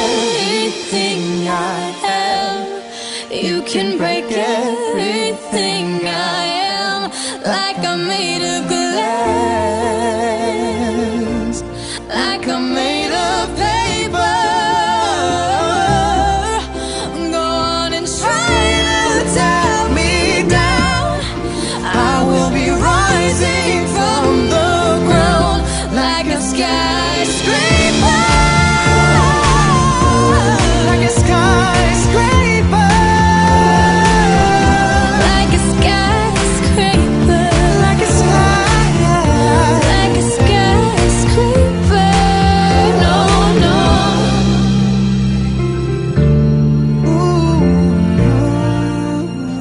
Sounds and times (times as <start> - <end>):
Singing: 0.0 - 45.0
Music: 0.0 - 49.6.